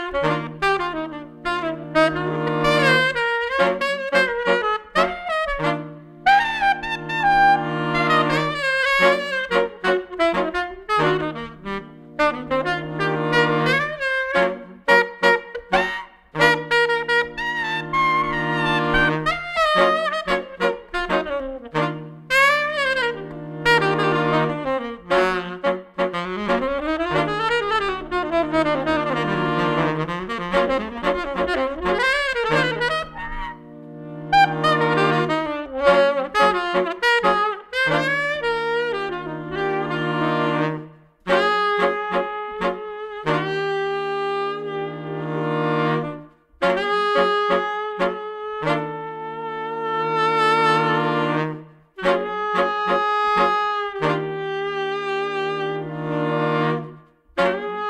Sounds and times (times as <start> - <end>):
Jazz: 0.0 - 57.8
Saxophone: 0.0 - 57.8.